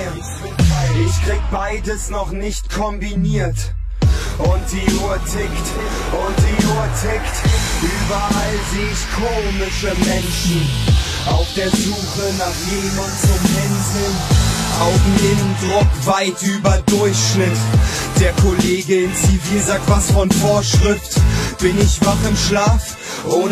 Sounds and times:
Speech: 0:00.0 - 0:14.2, 0:14.8 - 0:23.5
Dubstep: 0:00.0 - 0:23.5.

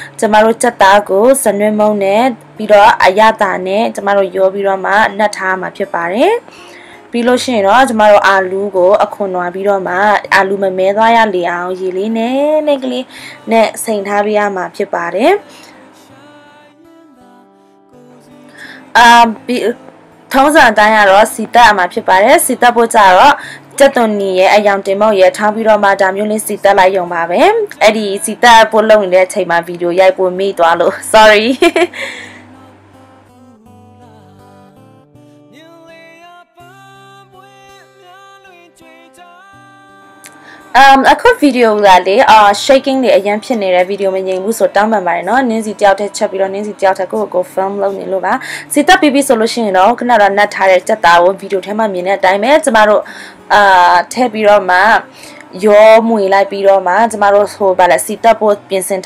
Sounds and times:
Speech: 0:00.2 - 0:06.4, 0:07.2 - 0:15.5, 0:19.0 - 0:19.8, 0:20.4 - 0:31.7, 0:40.8 - 0:59.0.

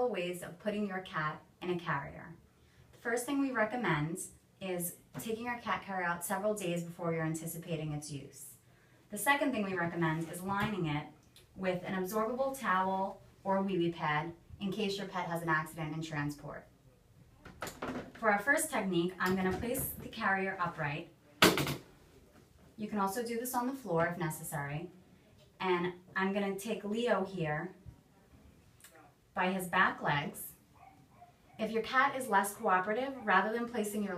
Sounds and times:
Speech: 0:03.0 - 0:16.7, 0:18.2 - 0:21.1, 0:22.8 - 0:27.8, 0:28.8 - 0:30.6, 0:31.6 - 0:34.1.

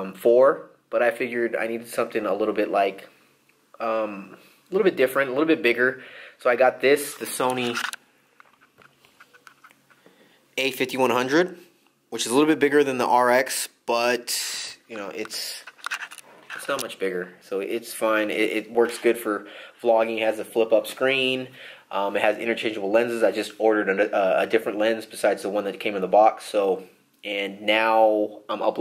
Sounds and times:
Speech: 0:00.0 - 0:03.2, 0:03.8 - 0:07.9, 0:10.6 - 0:15.7, 0:16.6 - 0:28.8
Inside, small room: 0:00.0 - 0:28.8.

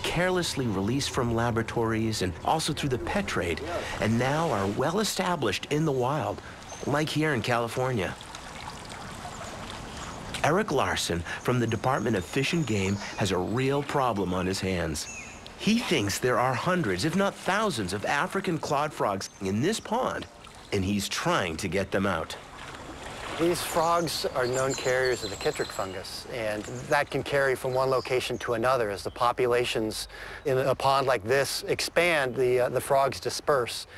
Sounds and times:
Speech: 0:00.0 - 0:08.2, 0:10.4 - 0:22.4, 0:23.4 - 0:33.9
Outside, rural or natural: 0:00.0 - 0:33.9
Trickle, dribble: 0:06.0 - 0:11.4, 0:17.8 - 0:24.2.

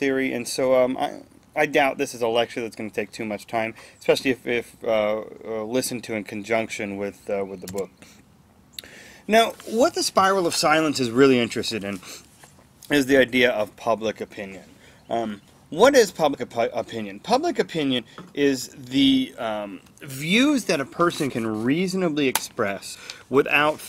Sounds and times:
Speech: 0:00.0 - 0:07.9, 0:09.3 - 0:12.0, 0:12.9 - 0:23.8.

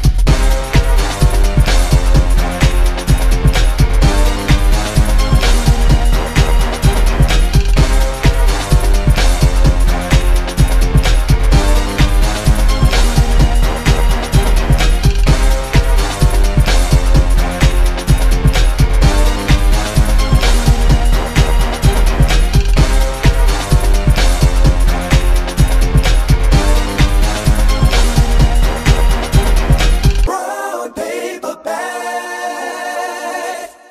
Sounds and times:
Rhythm and blues: 0:00.0 - 0:30.4.

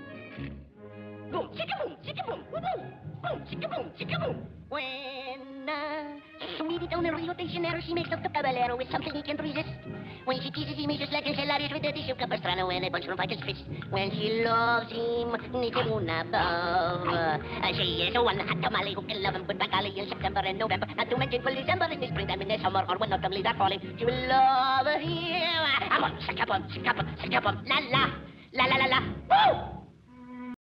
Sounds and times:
Music: 0:00.0 - 0:30.6
Speech: 0:01.3 - 0:05.1, 0:06.4 - 0:24.6, 0:25.6 - 0:29.7.

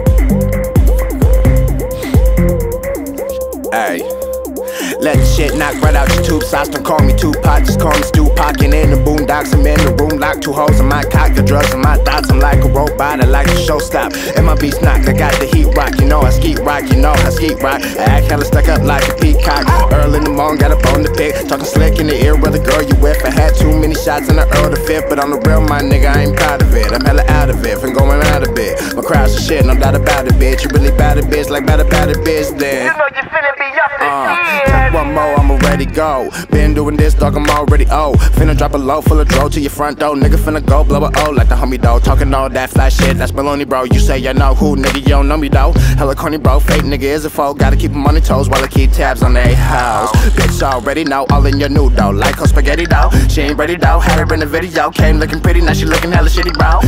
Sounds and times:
Dance music: 0:00.0 - 0:56.8.

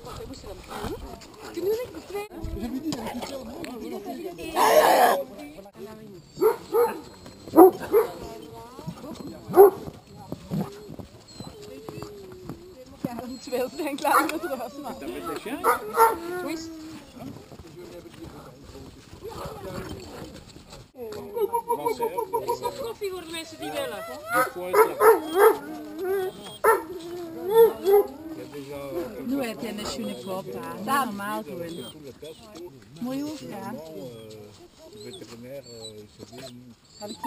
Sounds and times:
Outside, rural or natural: 0:00.0 - 0:37.2
Bark: 0:06.4 - 0:08.2, 0:09.5 - 0:09.9, 0:15.6 - 0:16.2, 0:24.3 - 0:25.6, 0:26.6 - 0:26.9, 0:27.5 - 0:28.1
Bow-wow: 0:06.4 - 0:08.3, 0:09.5 - 0:09.9, 0:15.6 - 0:16.5, 0:23.7 - 0:28.2.

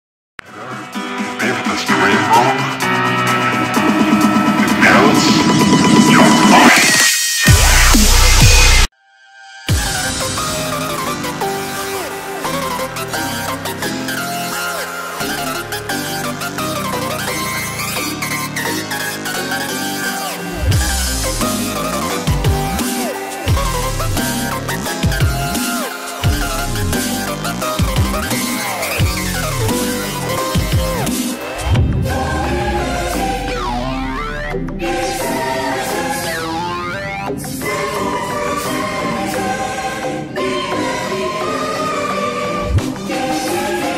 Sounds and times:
Dubstep: 0:03.7 - 0:08.9, 0:19.8 - 0:37.3.

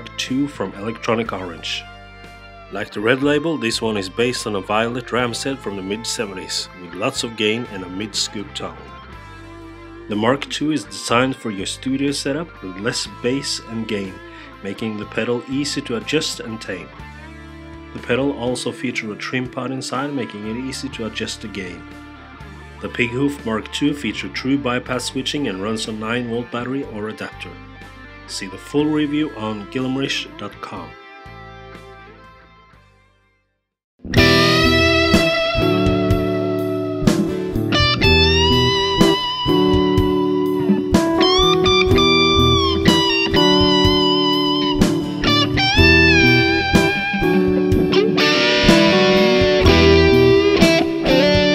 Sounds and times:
Speech: 0:00.0 - 0:01.9, 0:02.8 - 0:08.9, 0:10.1 - 0:17.0, 0:18.0 - 0:21.8, 0:22.8 - 0:27.6, 0:28.3 - 0:31.0
Music: 0:00.0 - 0:51.5.

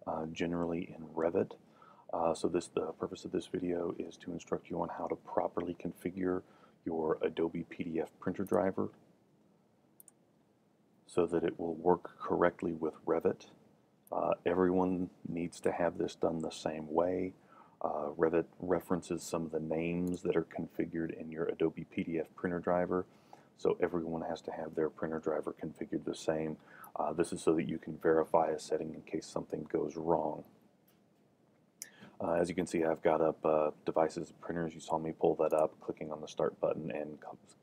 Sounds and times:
Speech: 0:00.0 - 0:09.0, 0:11.1 - 0:30.6, 0:31.9 - 0:37.6.

